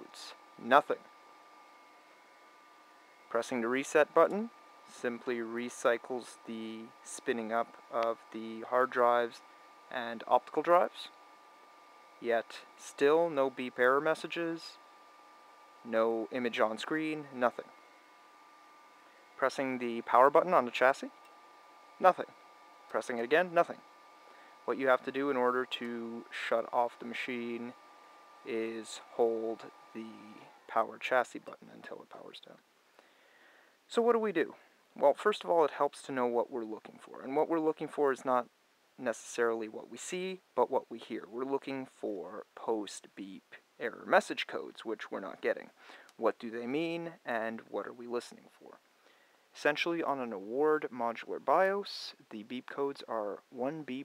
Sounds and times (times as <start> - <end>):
Speech: 0.0 - 1.1, 3.3 - 11.2, 12.2 - 14.8, 15.8 - 17.7, 19.4 - 21.2, 22.0 - 22.3, 22.9 - 23.8, 24.7 - 27.8, 28.5 - 32.6, 33.9 - 48.8, 49.6 - 54.0.